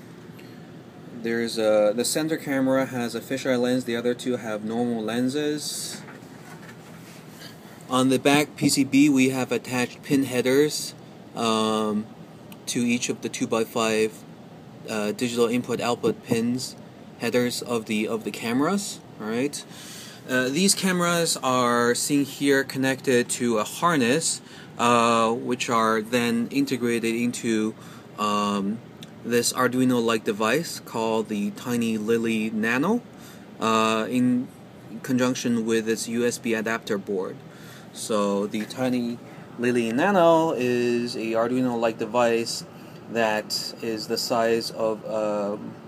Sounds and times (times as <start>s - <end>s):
Speech: 1.2s - 6.1s, 7.9s - 19.7s, 20.3s - 37.4s, 38.0s - 45.8s.